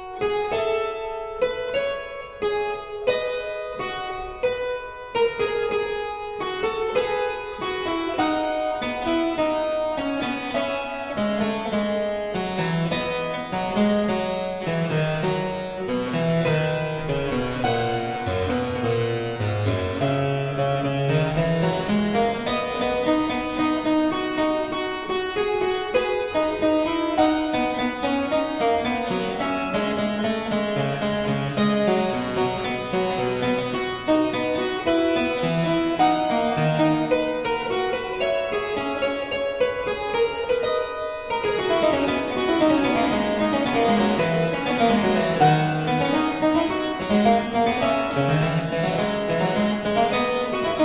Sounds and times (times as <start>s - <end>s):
Harpsichord: 0.0s - 50.8s.